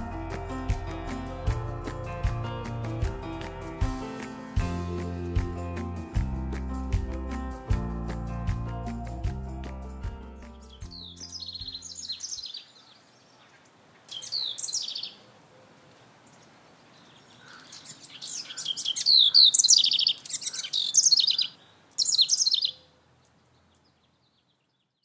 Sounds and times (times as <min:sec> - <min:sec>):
Outside, rural or natural: 0:00.0 - 0:25.0
Bird: 0:10.9 - 0:25.0.